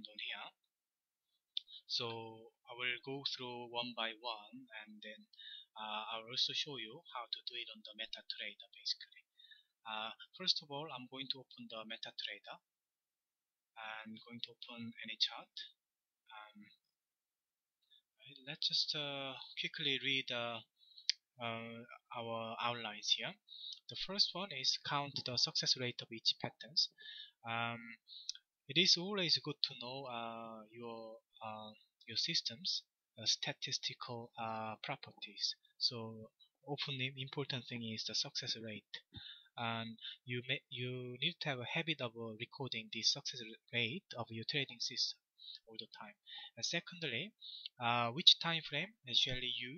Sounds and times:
Speech: 0:00.0 - 0:00.7, 0:01.6 - 0:12.7, 0:13.8 - 0:16.8, 0:18.2 - 0:49.7.

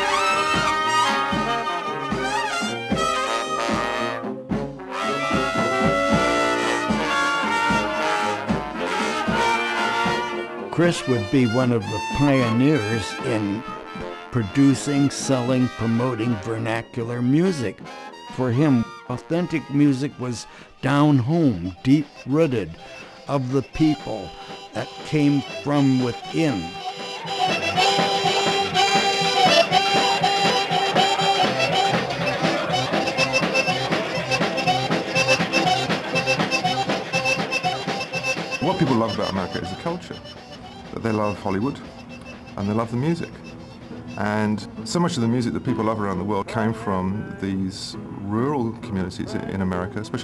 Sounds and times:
Music: 0:00.0 - 0:50.2
Speech: 0:10.7 - 0:26.8, 0:38.6 - 0:40.2, 0:40.9 - 0:41.8, 0:42.6 - 0:43.4, 0:44.2 - 0:50.2.

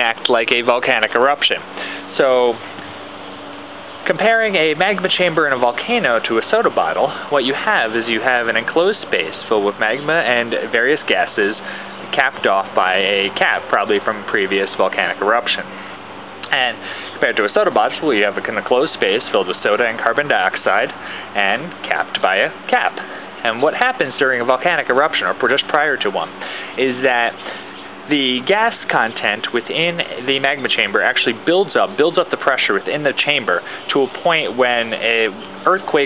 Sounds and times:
Speech: 0:00.0 - 0:02.6, 0:04.0 - 0:15.8, 0:16.5 - 0:27.5, 0:28.1 - 0:36.0.

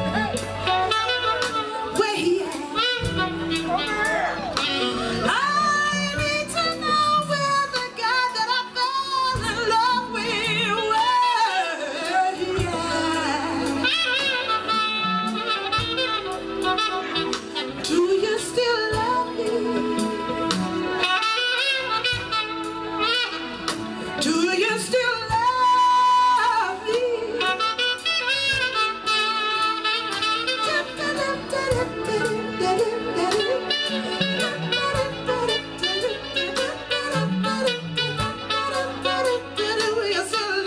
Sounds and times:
Orchestra: 0:00.0 - 0:40.6
Saxophone: 0:00.0 - 0:40.6.

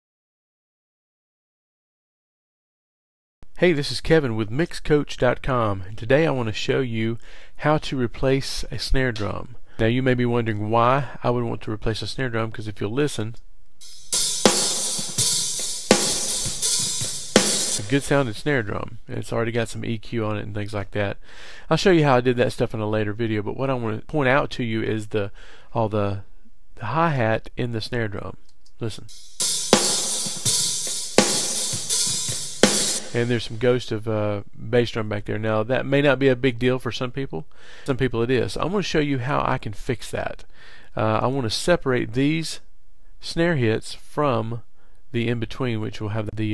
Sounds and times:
Speech: 0:03.6 - 0:13.4, 0:17.8 - 0:29.1, 0:33.1 - 0:46.5
Music: 0:13.8 - 0:18.5, 0:29.1 - 0:33.6.

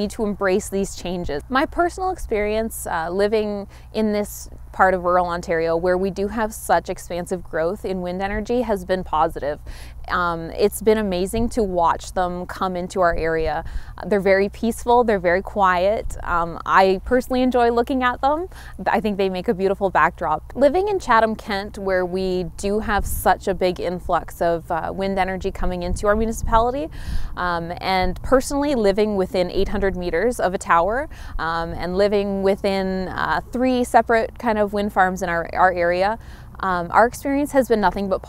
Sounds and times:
Speech: 0:00.0 - 0:38.2.

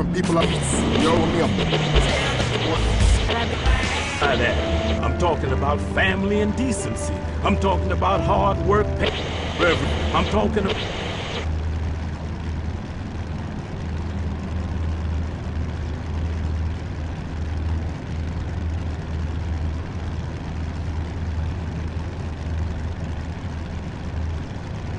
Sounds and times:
Truck: 0:00.0 - 0:24.9.

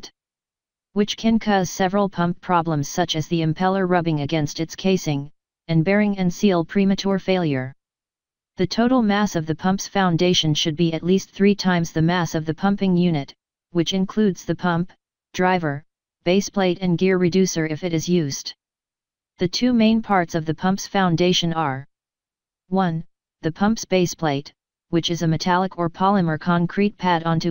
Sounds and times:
Speech: 0:01.0 - 0:07.8, 0:08.6 - 0:18.6, 0:19.4 - 0:21.9, 0:22.7 - 0:27.5.

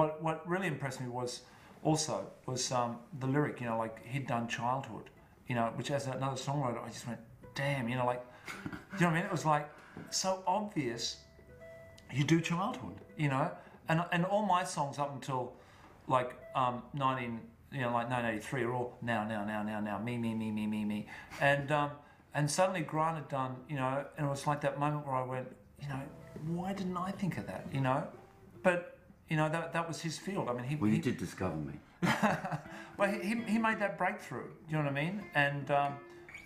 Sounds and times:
Speech: 0:00.0 - 0:08.2, 0:09.0 - 0:11.2, 0:12.1 - 0:31.8, 0:33.0 - 0:36.0.

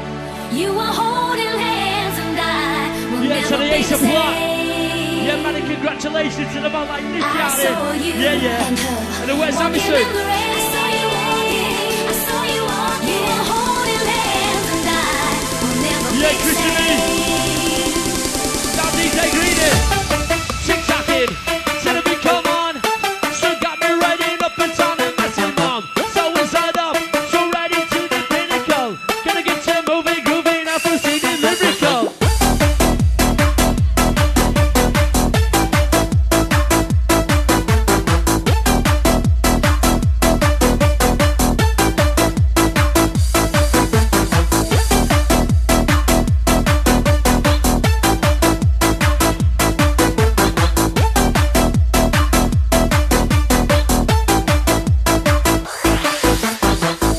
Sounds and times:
Music: 0:00.0 - 0:57.1.

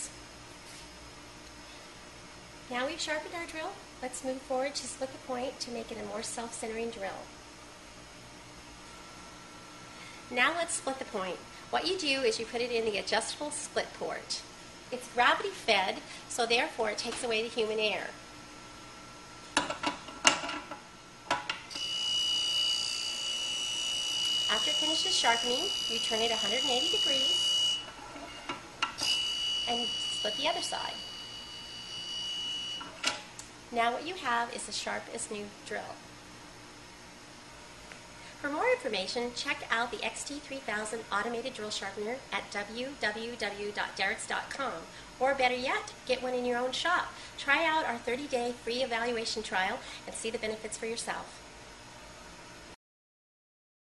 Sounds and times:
Speech: 0:02.7 - 0:07.3, 0:10.3 - 0:18.2, 0:24.5 - 0:27.4, 0:29.7 - 0:31.0, 0:33.7 - 0:36.0, 0:38.4 - 0:51.4.

